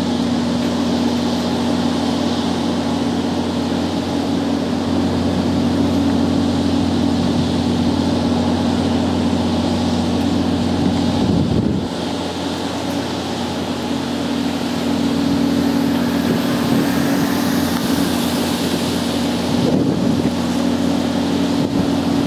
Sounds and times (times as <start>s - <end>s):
Stream: 0.0s - 22.2s.